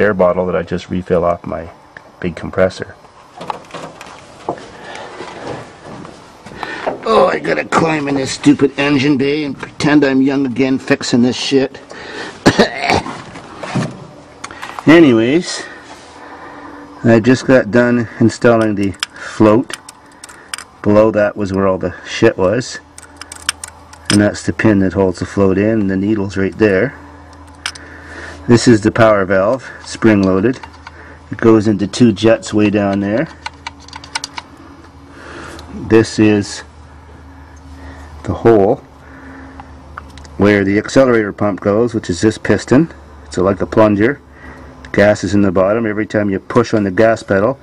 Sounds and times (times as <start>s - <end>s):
Speech: 0.0s - 3.0s, 7.0s - 11.8s, 14.8s - 15.7s, 17.0s - 19.7s, 20.8s - 22.8s, 24.1s - 27.0s, 28.5s - 30.6s, 31.3s - 33.4s, 35.7s - 36.7s, 38.2s - 38.8s, 40.4s - 44.2s, 44.9s - 47.6s.